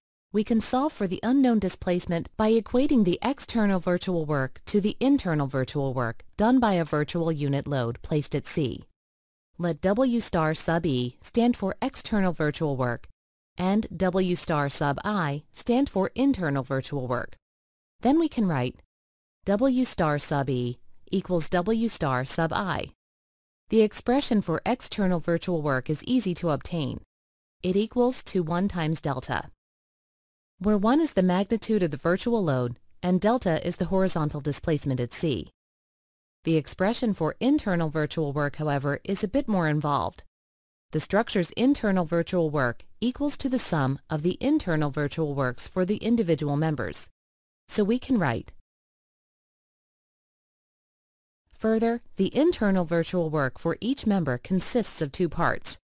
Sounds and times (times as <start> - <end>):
Speech: 0.4 - 8.9, 9.6 - 17.4, 18.0 - 18.8, 19.5 - 23.0, 23.7 - 27.1, 27.7 - 29.5, 30.6 - 35.5, 36.5 - 40.3, 41.0 - 47.1, 47.7 - 48.6, 51.6 - 55.8.